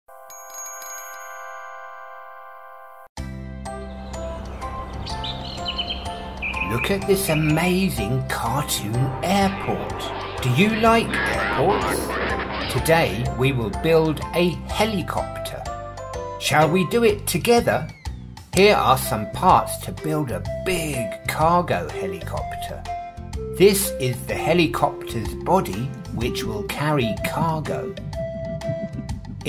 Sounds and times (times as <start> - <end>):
Music: 3.1 - 29.4
Outside, rural or natural: 3.3 - 14.4
Speech: 6.6 - 15.7, 16.4 - 17.9, 18.6 - 22.9, 23.6 - 28.0.